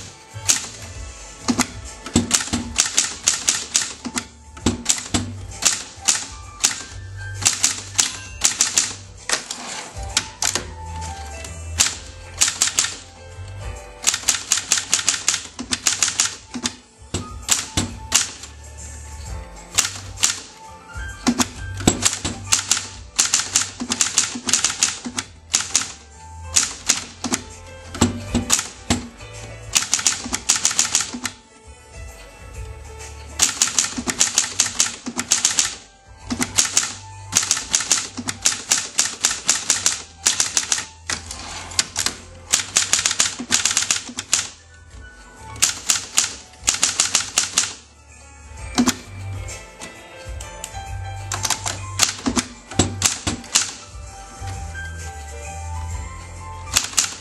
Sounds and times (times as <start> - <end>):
Typewriter: 0.0 - 13.1, 14.0 - 18.6, 19.7 - 20.6, 21.2 - 31.4, 33.3 - 44.6, 45.5 - 47.8, 48.7 - 49.1, 50.6 - 54.0, 56.7 - 57.2
Music: 0.0 - 57.2.